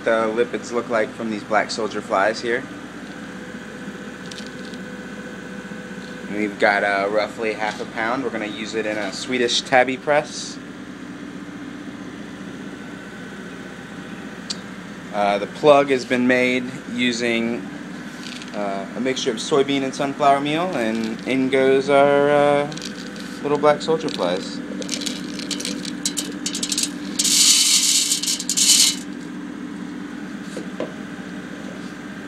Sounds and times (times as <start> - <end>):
Speech: 0.0 - 2.7, 6.3 - 10.6, 15.1 - 17.6, 18.6 - 22.8, 23.4 - 24.7.